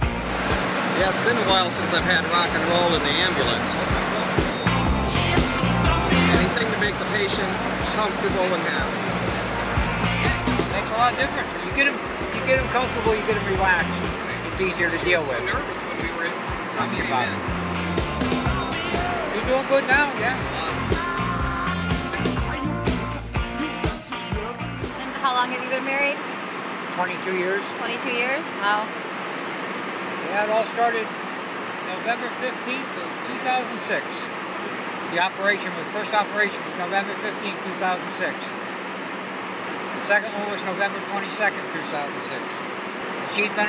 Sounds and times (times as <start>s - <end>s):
Rock and roll: 0.0s - 25.1s
Speech: 1.0s - 4.3s, 6.3s - 9.0s, 10.7s - 17.4s, 19.3s - 20.8s, 25.0s - 26.2s, 30.2s - 31.1s, 31.9s - 34.3s, 35.1s - 38.6s, 40.0s - 42.6s, 43.3s - 43.6s.